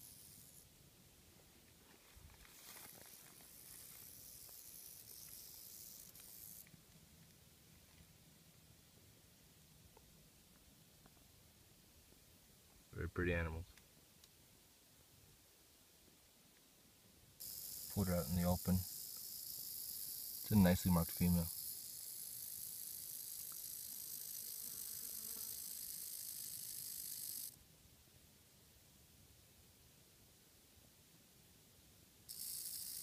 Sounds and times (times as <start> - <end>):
Snake: 0.0 - 0.8, 2.3 - 7.0, 17.4 - 27.6, 32.3 - 33.0.